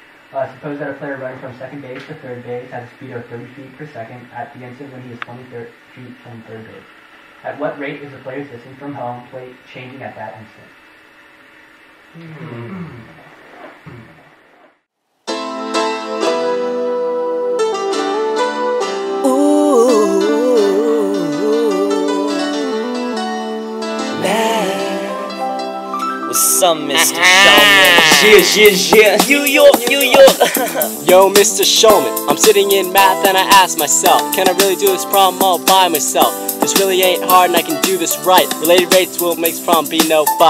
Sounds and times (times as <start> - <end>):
Traditional music: 15.3 - 19.3, 21.5 - 40.5
Blues: 15.5 - 40.5.